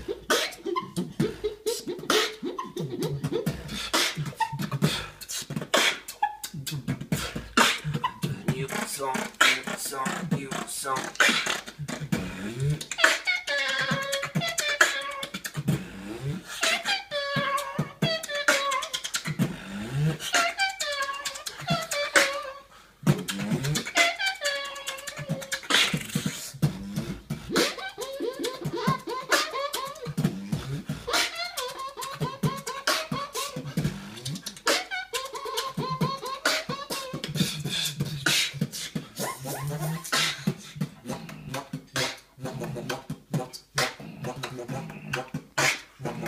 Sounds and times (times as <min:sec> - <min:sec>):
Beatboxing: 0:00.0 - 0:46.2
Inside, small room: 0:00.0 - 0:46.2.